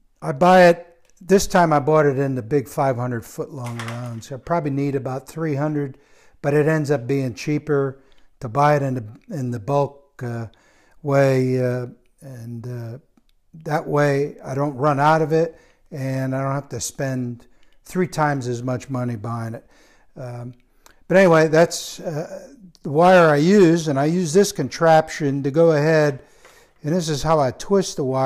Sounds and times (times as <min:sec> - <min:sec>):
Speech: 0:00.2 - 0:26.2, 0:26.8 - 0:28.2.